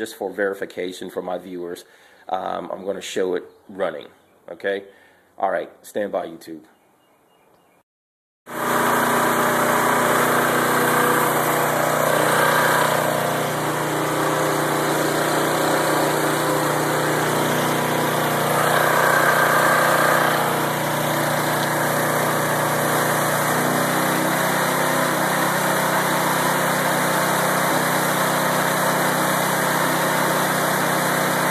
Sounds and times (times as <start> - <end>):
Lawn mower: 8.5 - 31.5.